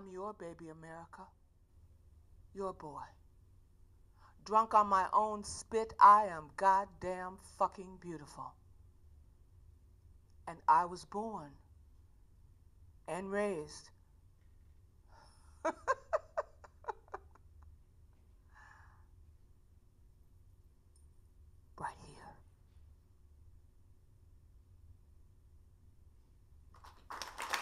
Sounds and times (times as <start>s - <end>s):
Speech: 0.0s - 1.4s, 2.6s - 3.2s, 4.4s - 8.6s, 10.5s - 11.7s, 13.1s - 14.0s, 21.8s - 22.4s.